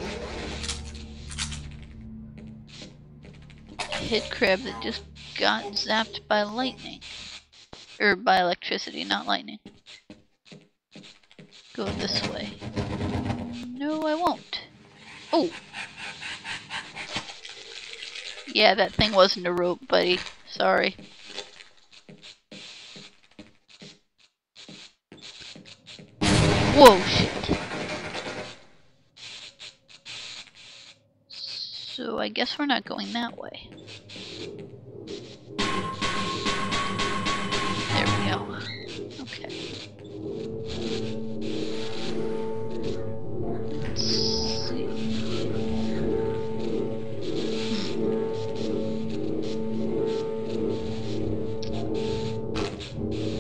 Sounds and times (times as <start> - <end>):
Speech: 3.9 - 7.0, 8.0 - 9.6, 11.8 - 12.6, 13.6 - 14.7, 15.4 - 15.6, 18.5 - 21.0, 26.7 - 27.6, 31.4 - 33.7, 38.0 - 39.6, 43.8 - 45.0.